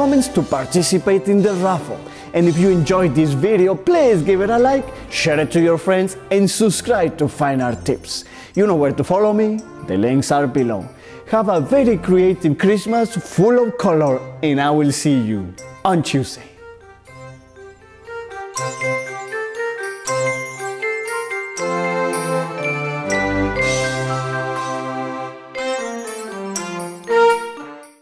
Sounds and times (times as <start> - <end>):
Music: 0.0 - 28.0.